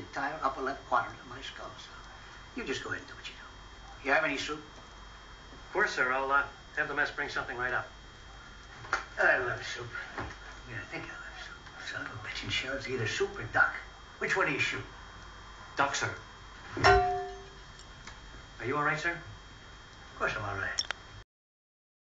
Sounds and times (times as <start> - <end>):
Speech: 0.0 - 4.7, 5.7 - 8.0, 9.2 - 14.9, 15.8 - 16.3, 18.6 - 19.3, 20.2 - 20.8.